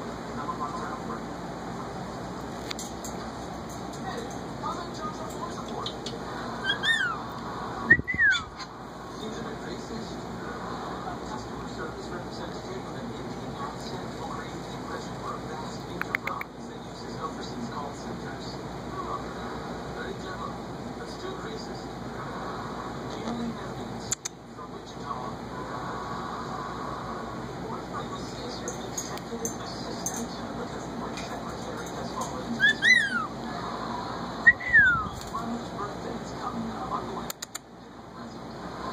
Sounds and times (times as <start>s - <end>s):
Speech: 0.0s - 2.3s, 3.8s - 6.7s, 9.0s - 25.9s, 27.2s - 38.9s
Whistling: 7.9s - 8.5s, 34.5s - 35.1s.